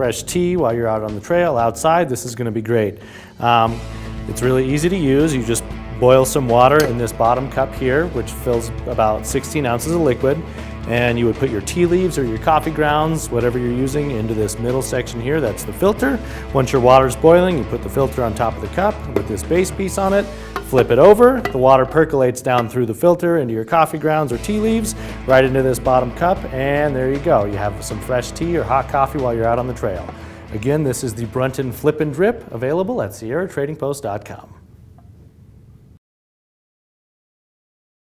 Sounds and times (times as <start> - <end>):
Music: 0.0 - 33.8
Speech: 0.0 - 34.6.